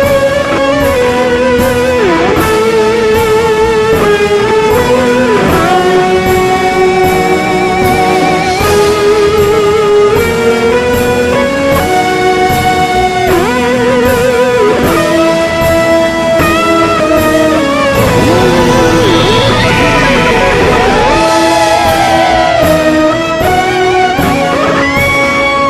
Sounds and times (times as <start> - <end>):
Music: 0.0 - 25.6.